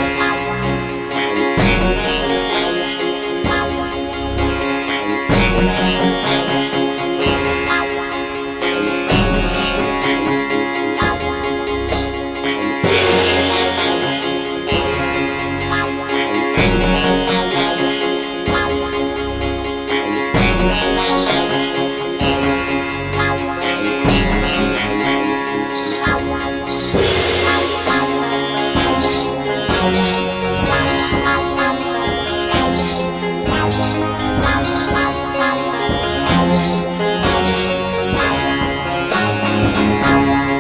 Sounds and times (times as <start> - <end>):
Music: 0.0 - 40.6.